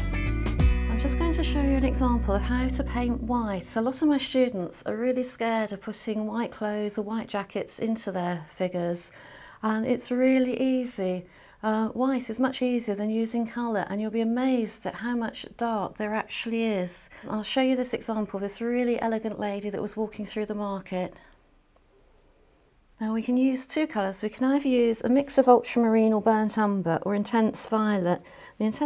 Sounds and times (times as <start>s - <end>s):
Speech: 0.9s - 21.3s, 23.0s - 28.8s.